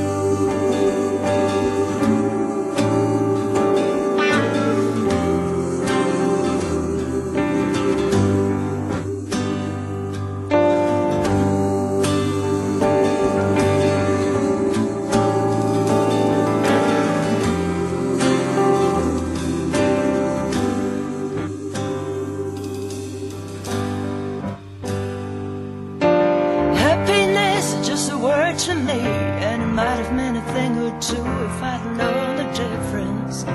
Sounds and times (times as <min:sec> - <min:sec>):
Music: 0:00.0 - 0:33.5.